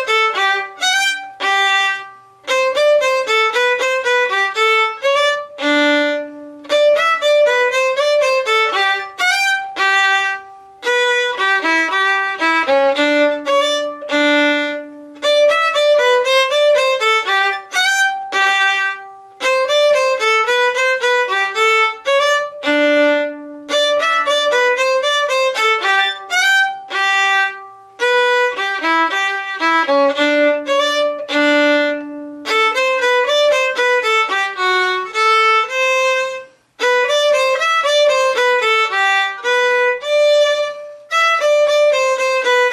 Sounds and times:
Violin, fiddle: 0.0 - 42.7.

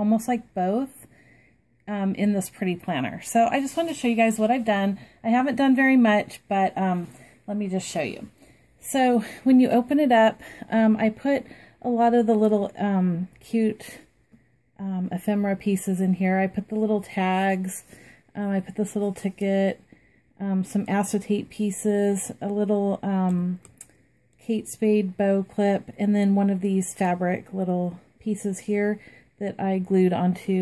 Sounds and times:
Speech: 0.0 - 1.1, 1.9 - 14.0, 14.8 - 19.8, 20.4 - 23.7, 24.4 - 30.6.

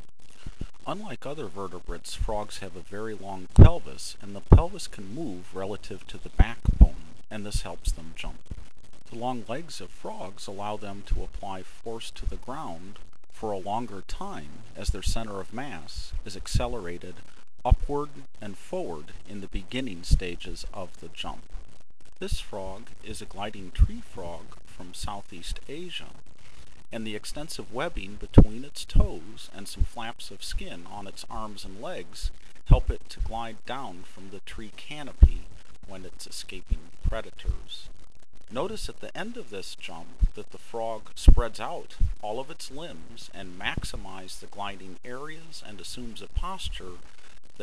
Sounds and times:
Speech: 0.8 - 8.4, 9.1 - 21.4, 22.2 - 26.2, 27.0 - 37.9, 38.5 - 47.0.

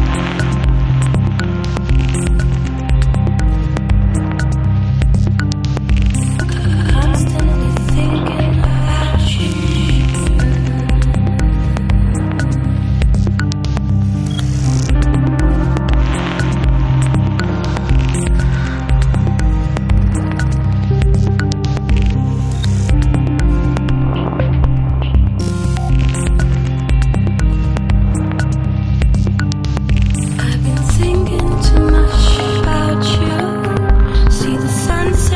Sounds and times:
Music: 0.0 - 35.3.

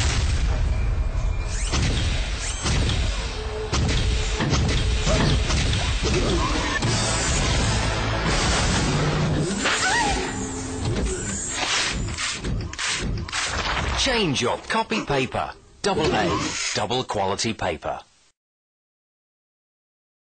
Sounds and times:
Speech: 14.0 - 18.1.

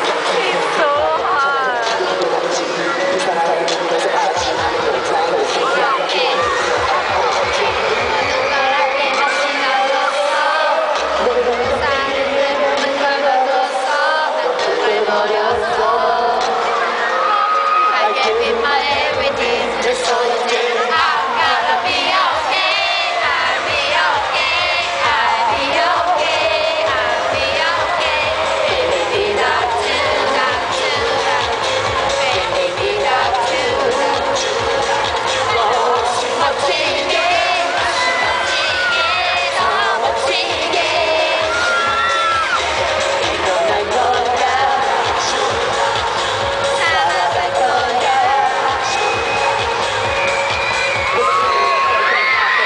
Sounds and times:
Music: 0.0 - 52.6.

